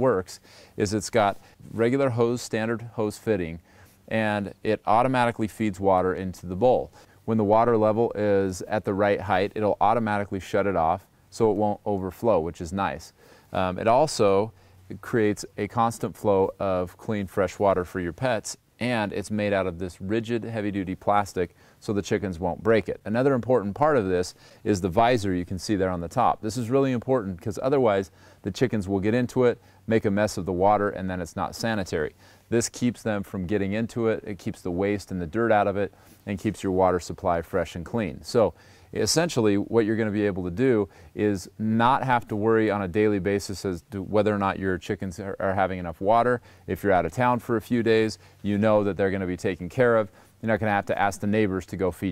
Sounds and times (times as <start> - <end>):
Speech: 0.0 - 52.1.